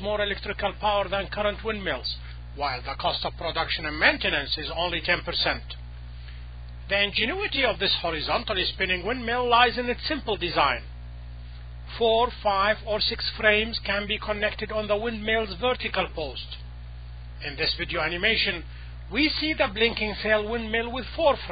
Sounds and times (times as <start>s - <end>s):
Speech: 0.0s - 5.8s, 6.9s - 10.9s, 11.9s - 16.7s, 17.4s - 21.5s.